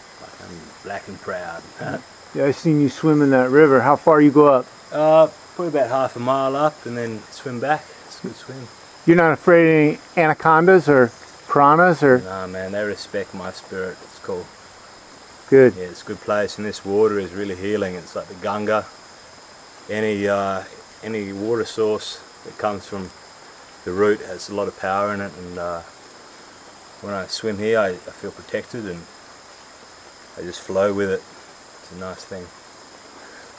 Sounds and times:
Speech: 0.2 - 14.5, 15.5 - 18.9, 19.9 - 23.1, 23.9 - 25.9, 27.0 - 29.1, 30.4 - 31.2, 31.9 - 32.5.

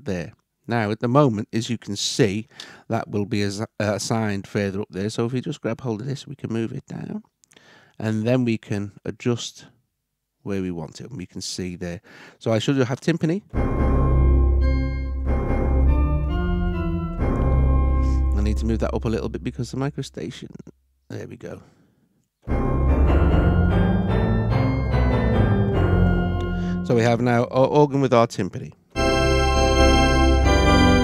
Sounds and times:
Speech: 0.0 - 7.3, 8.0 - 9.8, 10.4 - 13.5, 18.4 - 21.7, 26.8 - 28.8
Music: 13.6 - 19.7, 22.5 - 27.2, 29.0 - 31.0.

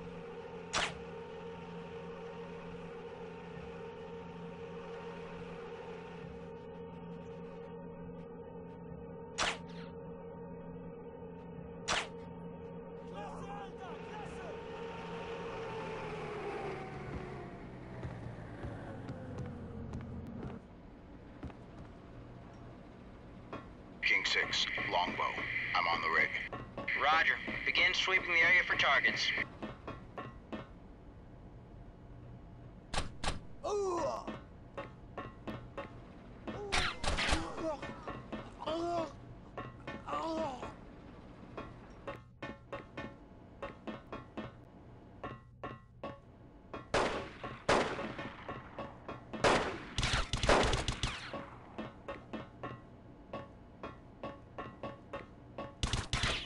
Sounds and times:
Speech: 24.0 - 29.4.

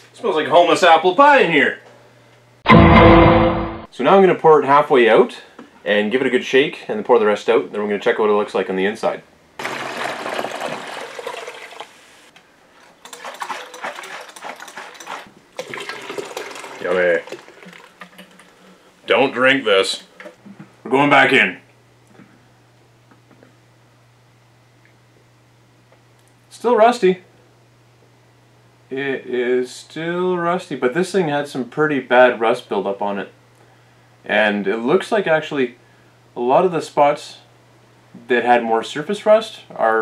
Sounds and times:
Speech: 0.2 - 1.8, 3.9 - 9.3, 16.8 - 17.2, 19.1 - 20.1, 20.9 - 21.6, 26.5 - 27.3, 28.9 - 33.4, 34.3 - 35.8, 36.4 - 37.5, 38.2 - 40.0
Liquid: 9.6 - 19.0.

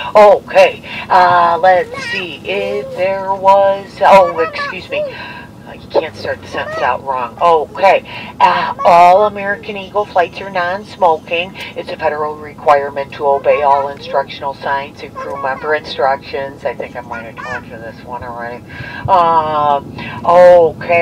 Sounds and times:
Narration, monologue: 0.0 - 21.0
Female speech, woman speaking: 0.1 - 21.0
Child speech, kid speaking: 1.6 - 5.1, 6.5 - 7.2, 8.7 - 9.3, 15.0 - 16.2, 17.1 - 17.7.

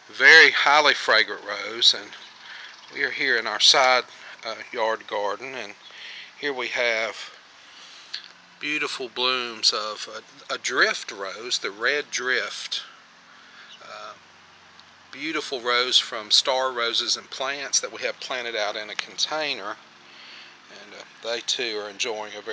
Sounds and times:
Speech: 0.1 - 2.2, 3.0 - 5.8, 6.4 - 7.3, 8.6 - 12.9, 13.8 - 14.2, 15.2 - 19.8, 20.7 - 22.5.

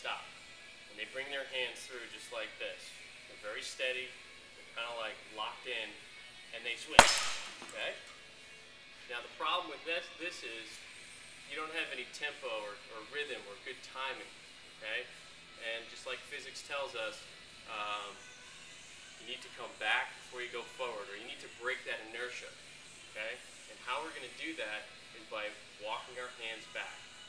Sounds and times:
Music: 0.0 - 27.2
Speech: 0.9 - 4.2, 4.8 - 7.0, 7.7 - 8.0, 9.1 - 10.8, 11.5 - 18.2, 19.2 - 22.5, 23.2 - 27.0.

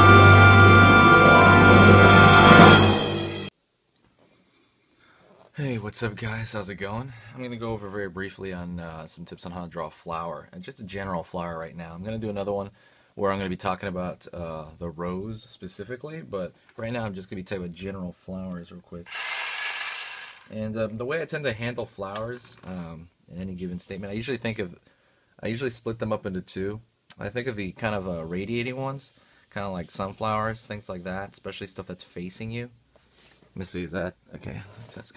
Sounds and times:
Music: 0.0 - 3.5
Speech: 5.5 - 19.1, 20.5 - 32.8, 33.6 - 35.1.

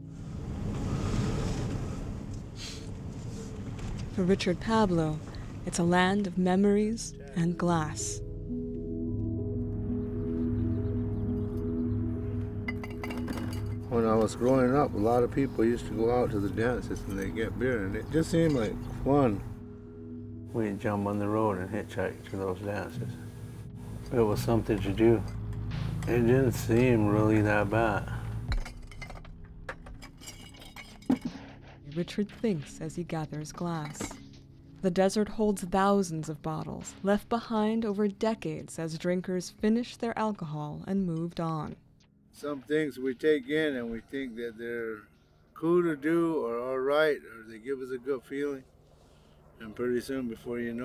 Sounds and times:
Music: 0.0 - 50.8.

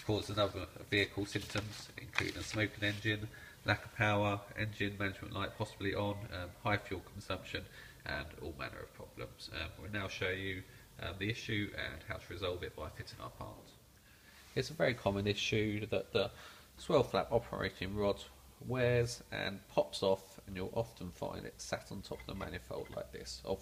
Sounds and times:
Speech: 0.0 - 13.8, 14.6 - 23.6.

